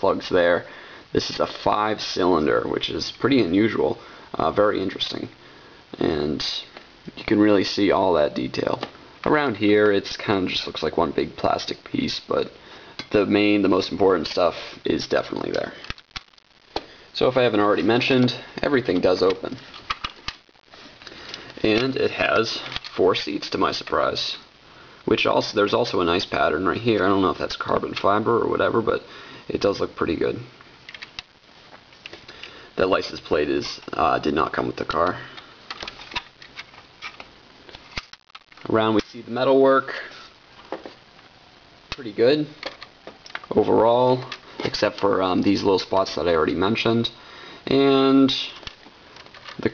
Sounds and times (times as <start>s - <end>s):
Speech: 0.0s - 15.8s, 17.2s - 19.6s, 21.6s - 24.5s, 25.1s - 30.5s, 32.8s - 35.4s, 38.6s - 40.2s, 41.9s - 42.6s, 43.5s - 48.6s.